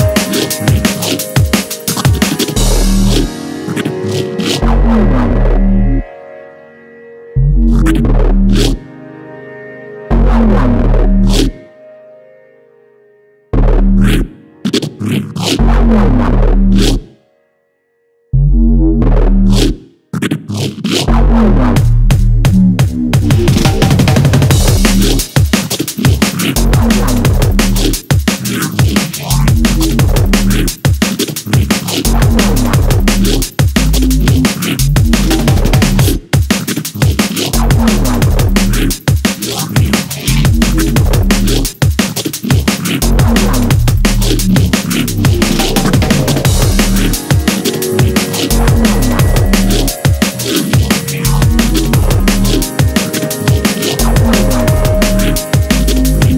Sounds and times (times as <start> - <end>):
Electronic music: 0.0 - 17.3, 18.4 - 56.3.